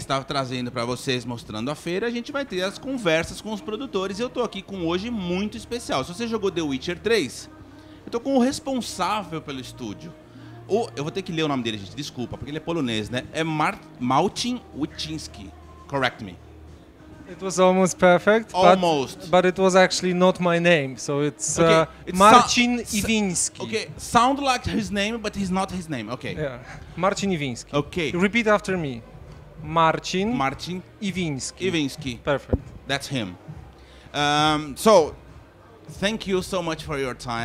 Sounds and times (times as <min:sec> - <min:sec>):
Speech: 0:17.3 - 0:29.0.